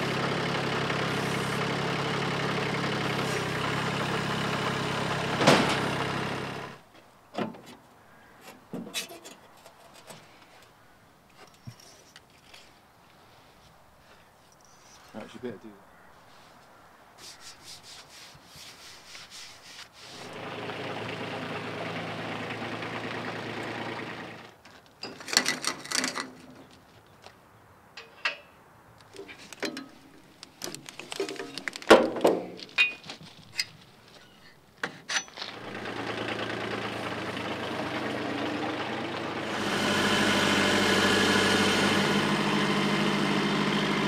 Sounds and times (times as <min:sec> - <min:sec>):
Vehicle: 0:00.0 - 0:17.1, 0:20.0 - 0:44.0.